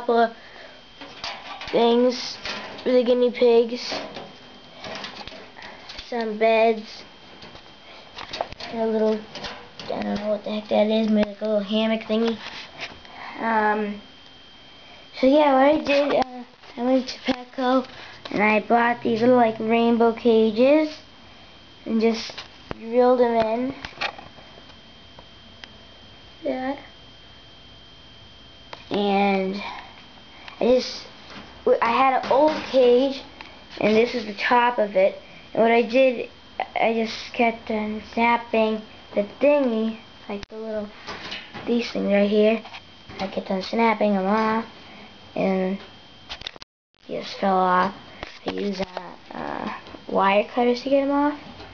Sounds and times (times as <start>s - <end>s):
Speech: 0.0s - 0.4s, 1.7s - 4.1s, 6.0s - 7.0s, 8.6s - 9.3s, 9.9s - 12.4s, 13.4s - 14.0s, 15.2s - 21.0s, 21.8s - 23.8s, 26.4s - 26.9s, 28.9s - 29.8s, 30.6s - 31.1s, 31.7s - 40.9s, 41.7s - 42.6s, 43.2s - 44.7s, 45.4s - 45.9s, 47.1s - 51.4s.